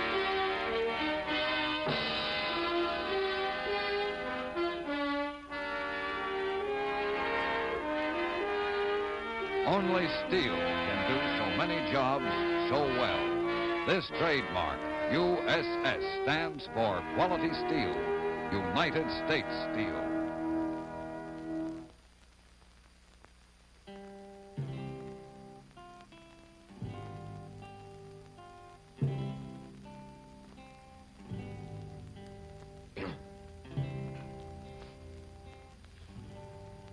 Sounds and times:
Speech: 9.6s - 13.3s, 13.9s - 20.2s.

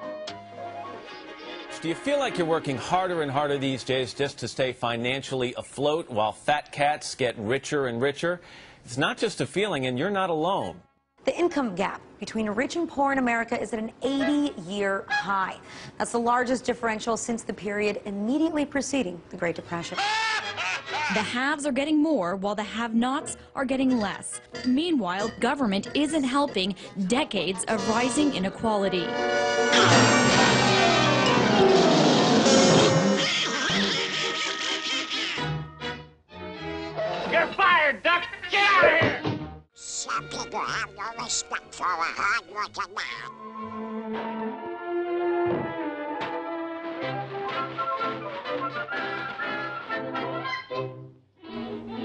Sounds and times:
Speech: 1.8s - 20.0s, 21.1s - 29.1s, 37.3s - 39.2s, 39.8s - 43.3s.

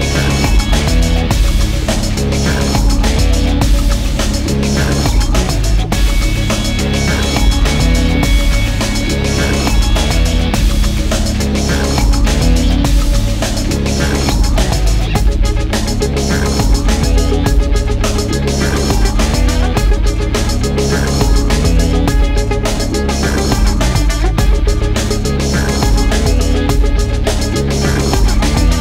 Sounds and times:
Music: 0.0s - 28.8s.

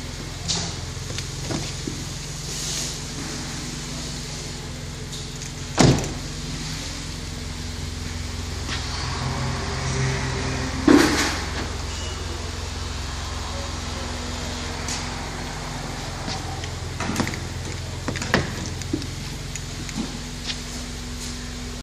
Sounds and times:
Car: 0.0s - 21.8s.

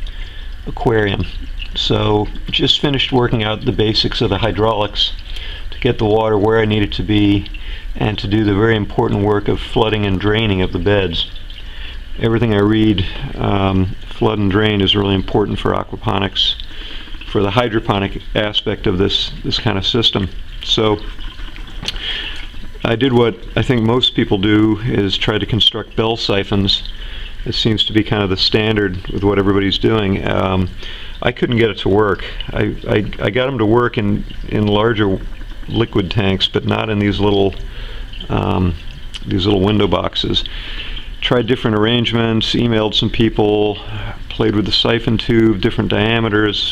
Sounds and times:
Speech: 0.7s - 5.2s, 5.8s - 11.4s, 12.2s - 16.7s, 17.3s - 21.1s, 22.8s - 37.6s, 38.2s - 40.5s, 41.2s - 46.7s.

